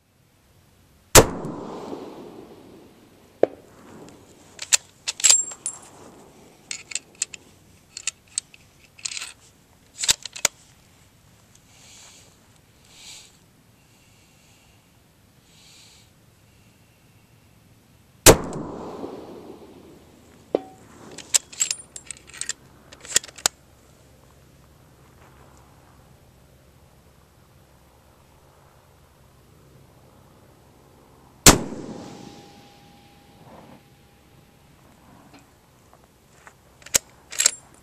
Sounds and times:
Outside, rural or natural: 0.0 - 37.8.

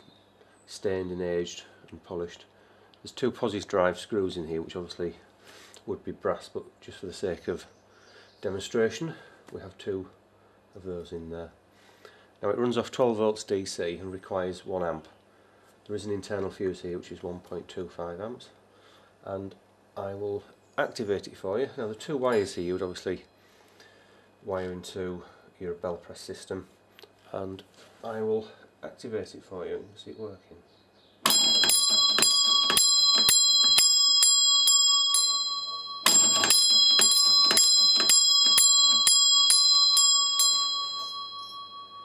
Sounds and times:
Speech: 0.7 - 7.7, 8.4 - 10.2, 10.8 - 11.6, 12.4 - 15.2, 15.9 - 18.6, 19.2 - 23.3, 24.4 - 26.7, 27.3 - 30.7
Bell: 31.3 - 42.0.

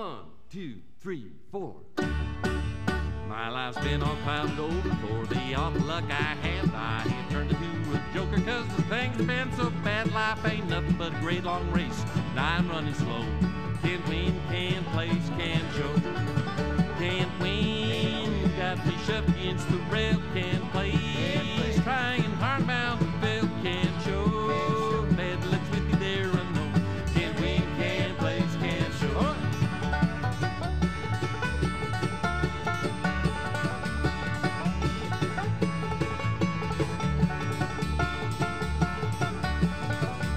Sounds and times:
Bluegrass: 1.9 - 40.3
Soul music: 2.0 - 40.3.

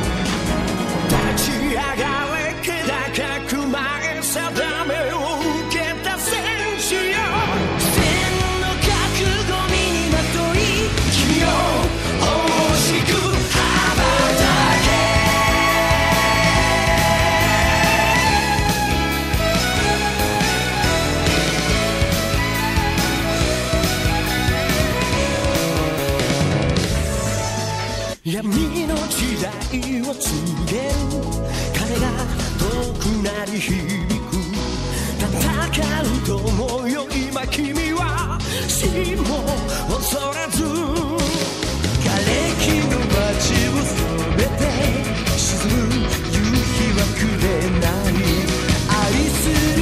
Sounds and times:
Music: 0.0 - 49.8.

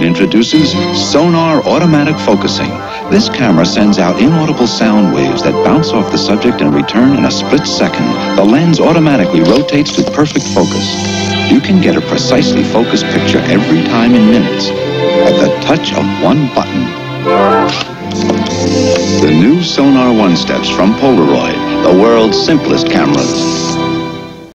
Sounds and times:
Speech: 0.0 - 16.9, 19.2 - 23.8
Music: 0.0 - 24.5
Single-lens reflex camera: 17.7 - 18.7.

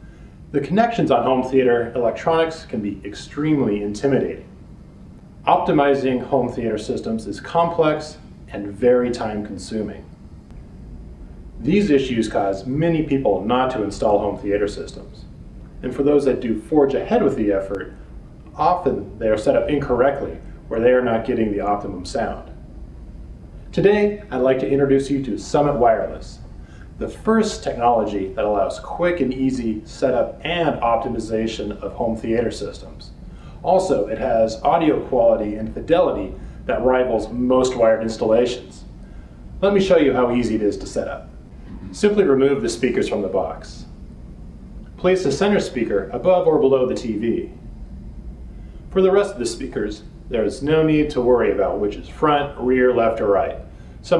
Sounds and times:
Speech: 0.5 - 4.5, 5.4 - 10.1, 11.6 - 15.2, 15.8 - 22.6, 23.7 - 26.4, 27.0 - 38.9, 39.6 - 43.9, 45.0 - 47.6, 48.9 - 54.1.

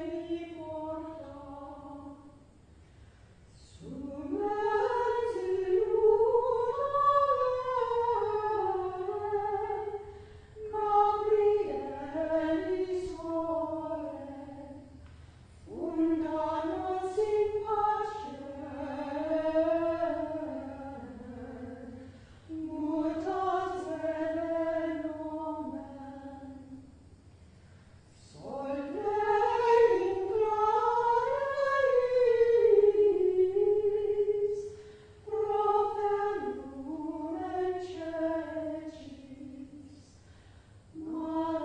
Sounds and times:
Mantra: 0.0 - 2.5, 3.5 - 15.0, 15.7 - 26.9, 28.2 - 41.6.

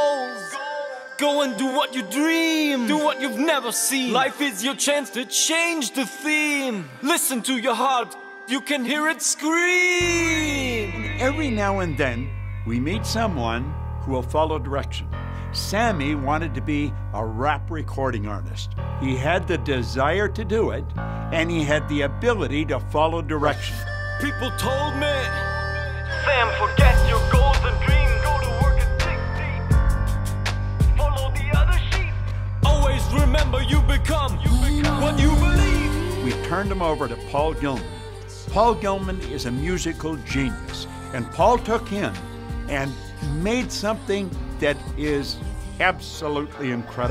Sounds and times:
Music: 0.0 - 47.1
Speech: 1.2 - 25.3, 26.2 - 29.6, 35.6 - 47.1.

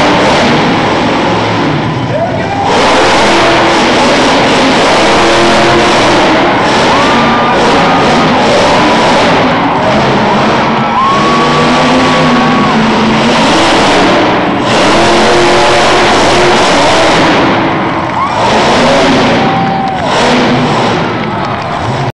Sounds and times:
Truck: 0.0 - 22.1.

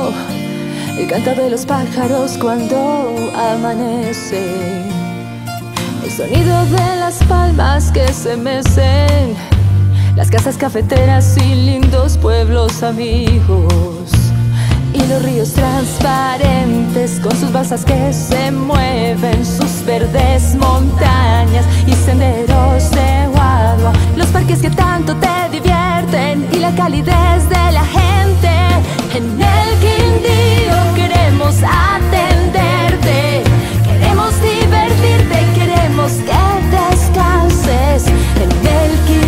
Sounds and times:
Music: 0.0 - 39.2.

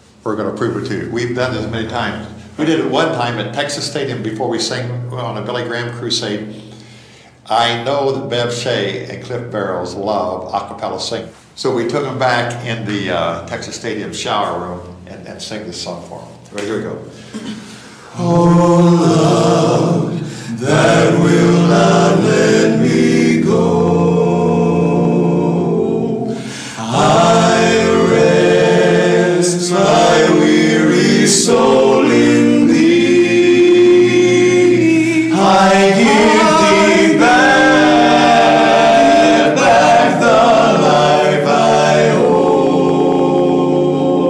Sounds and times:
Choir: 17.4 - 44.2.

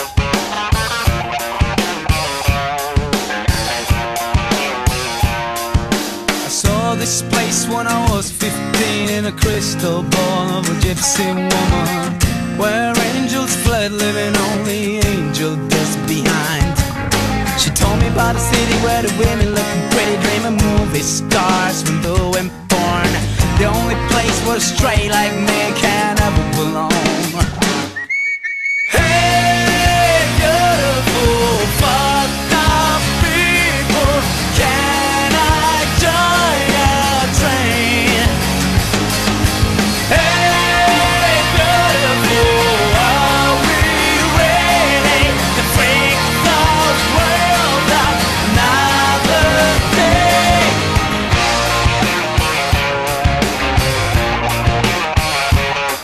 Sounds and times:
Music: 0.0 - 28.1, 28.9 - 56.0.

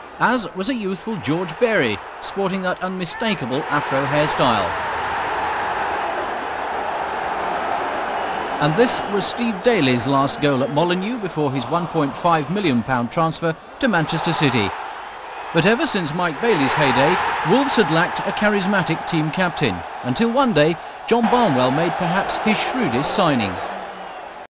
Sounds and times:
Speech: 0.2 - 4.7, 8.6 - 14.7, 15.6 - 23.6.

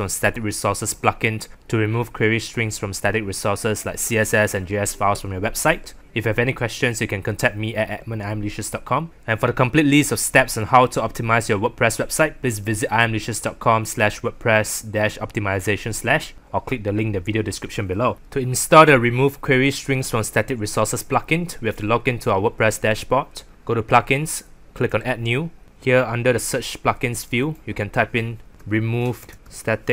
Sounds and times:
Speech: 0.0 - 29.9.

